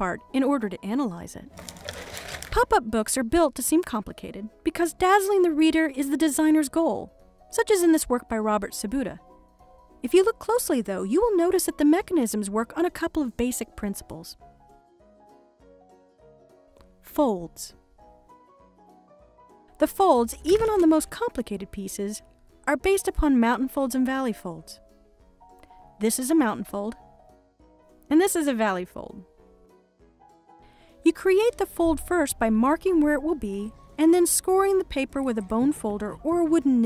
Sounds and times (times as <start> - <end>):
Speech: 0.0 - 1.5, 2.5 - 9.2, 10.0 - 14.4, 17.1 - 17.8, 19.8 - 24.8, 26.0 - 27.0, 28.1 - 29.2, 31.1 - 36.8
Music: 0.0 - 36.8.